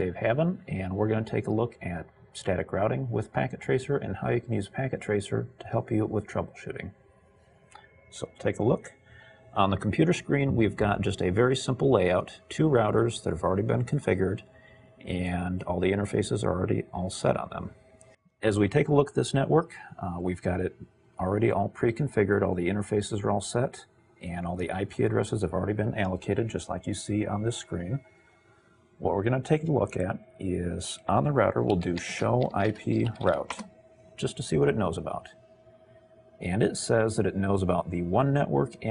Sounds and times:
Speech: 0:00.0 - 0:07.0, 0:08.1 - 0:08.9, 0:09.6 - 0:14.4, 0:15.0 - 0:17.8, 0:18.4 - 0:28.0, 0:29.0 - 0:33.6, 0:34.2 - 0:35.3, 0:36.4 - 0:38.9.

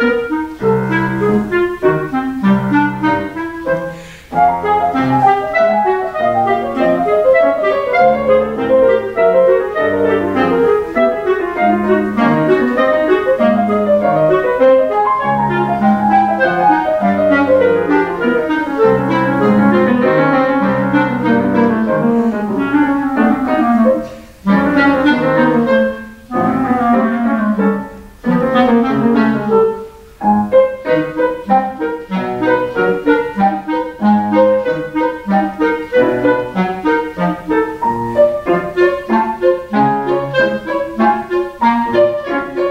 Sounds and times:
Clarinet: 0:00.0 - 0:42.7.

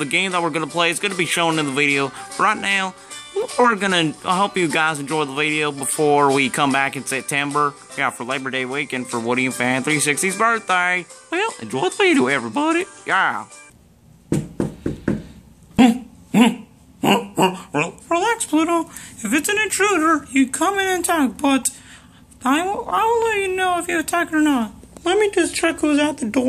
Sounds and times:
Speech: 0:00.0 - 0:13.5, 0:22.4 - 0:26.4
Music: 0:00.0 - 0:13.8.

